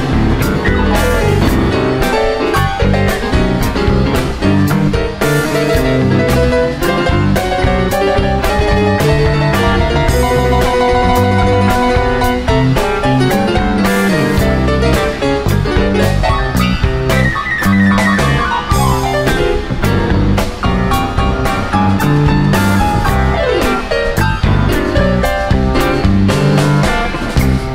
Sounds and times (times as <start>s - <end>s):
Blues: 0.0s - 27.7s.